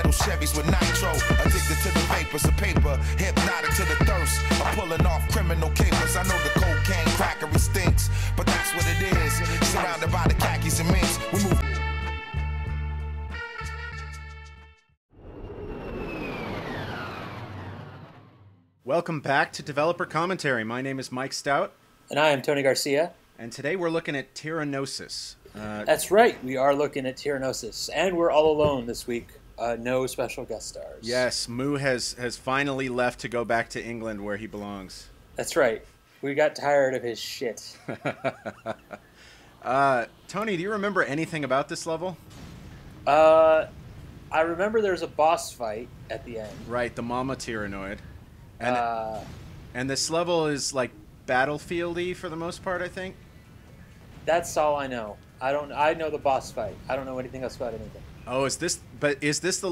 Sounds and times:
Speech: 18.9s - 37.8s, 39.6s - 42.2s, 43.1s - 43.7s, 44.3s - 48.0s, 48.6s - 53.2s, 54.3s - 59.7s.

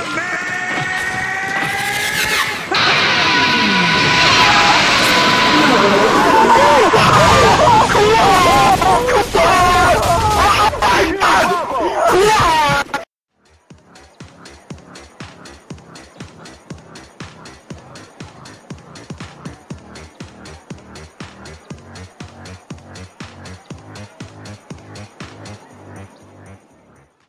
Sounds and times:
Music: 13.3s - 27.2s.

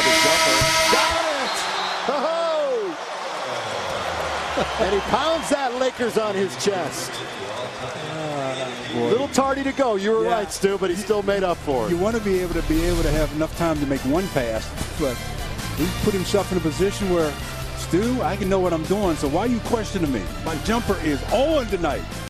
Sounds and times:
Speech: 0.0s - 1.6s, 4.8s - 7.2s, 7.9s - 15.2s, 15.8s - 22.0s
Music: 10.4s - 22.2s.

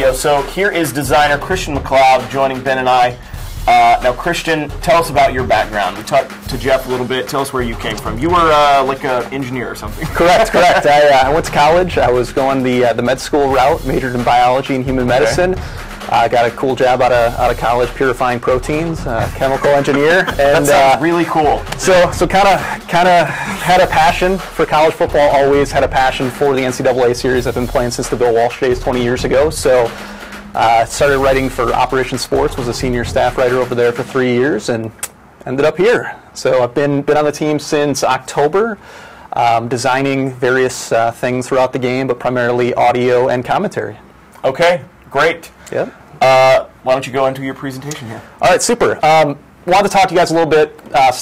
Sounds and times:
Speech: 0.0s - 29.9s, 30.6s - 38.8s, 39.4s - 51.2s
Music: 0.0s - 43.8s.

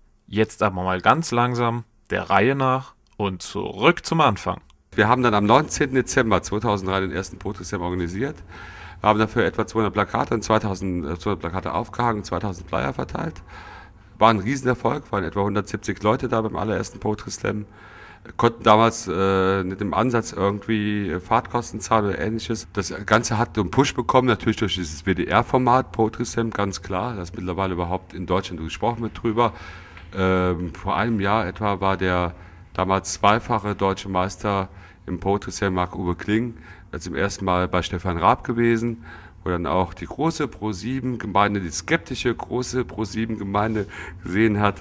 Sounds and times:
Speech: 0.3s - 8.4s, 9.0s - 13.4s, 14.2s - 44.8s.

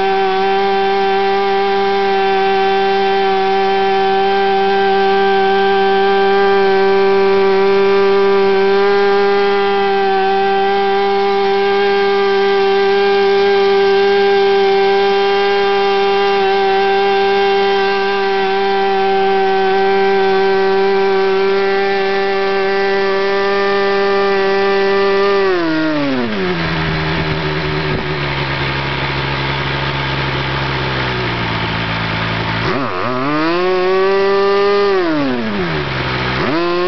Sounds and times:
Accelerating, revving, vroom: 0.0s - 36.8s
Idling: 0.0s - 36.8s.

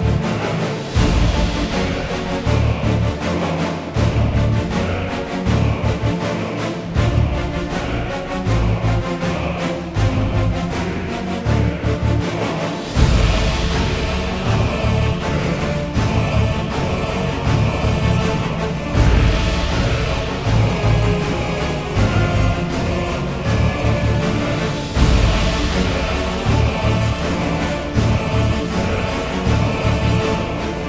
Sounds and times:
Music: 0.0s - 30.8s.

